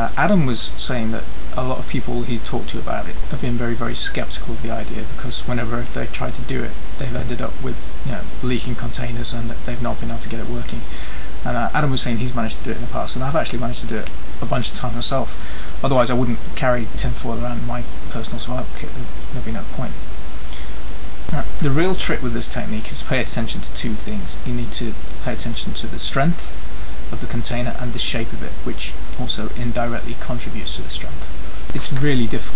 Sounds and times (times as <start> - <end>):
Speech: 0.0 - 20.0, 21.3 - 32.5.